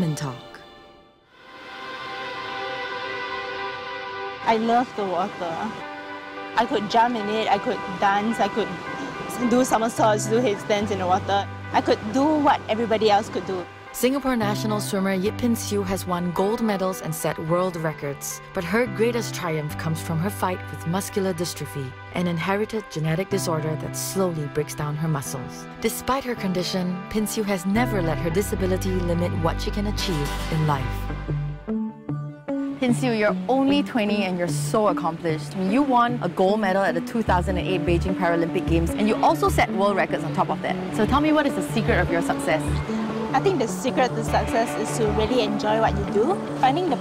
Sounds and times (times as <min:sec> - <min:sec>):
Music: 0:00.0 - 0:47.0
Speech: 0:04.4 - 0:05.7, 0:09.4 - 0:31.0, 0:32.8 - 0:42.8, 0:43.4 - 0:47.0.